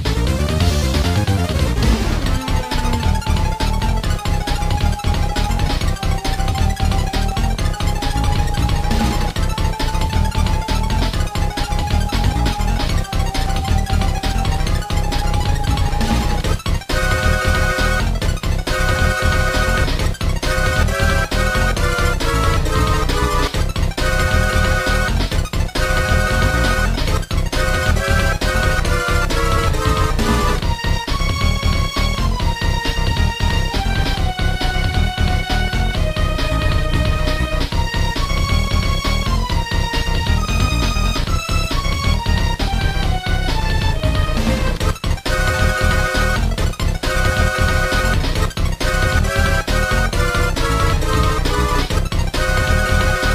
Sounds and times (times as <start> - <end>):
Music: 0.0 - 53.3.